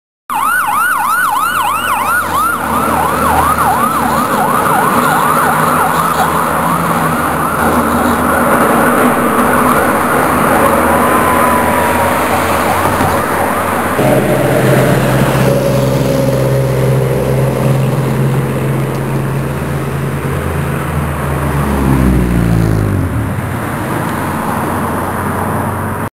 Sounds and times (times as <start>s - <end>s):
Truck: 0.3s - 26.1s.